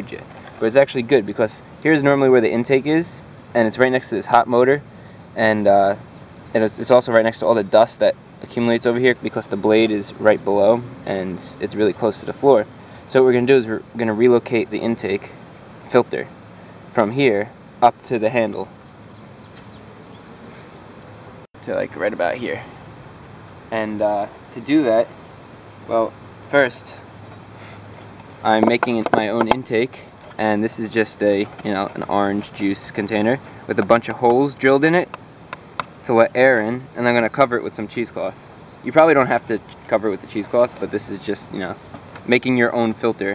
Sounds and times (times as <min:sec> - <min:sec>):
Speech: 0:00.0 - 0:04.8, 0:05.4 - 0:16.3, 0:16.9 - 0:18.7, 0:21.6 - 0:22.8, 0:23.7 - 0:25.1, 0:25.9 - 0:27.0, 0:28.4 - 0:35.1, 0:36.0 - 0:43.3.